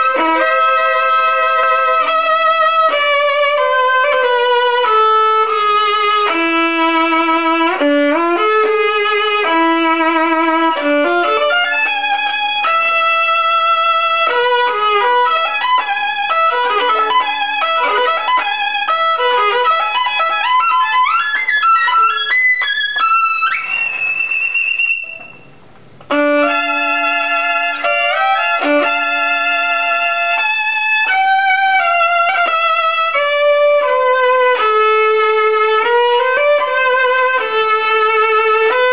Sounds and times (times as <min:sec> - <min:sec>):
Violin, fiddle: 0:00.0 - 0:25.4, 0:26.1 - 0:38.9.